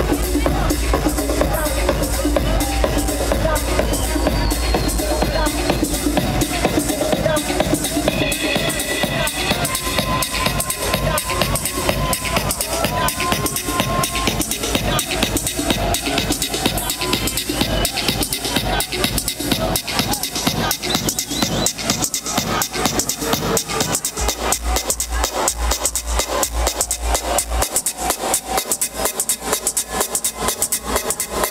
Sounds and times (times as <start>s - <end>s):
Crowd: 0.0s - 31.5s
Music: 0.0s - 31.5s.